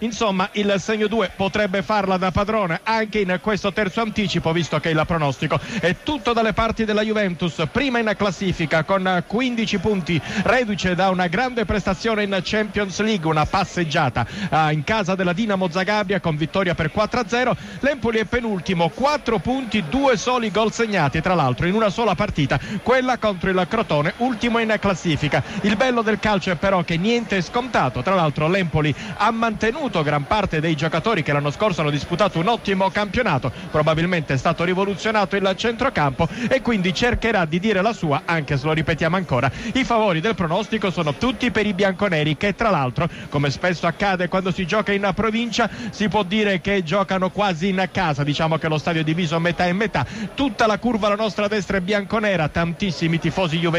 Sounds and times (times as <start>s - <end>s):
Speech: 0.0s - 53.7s.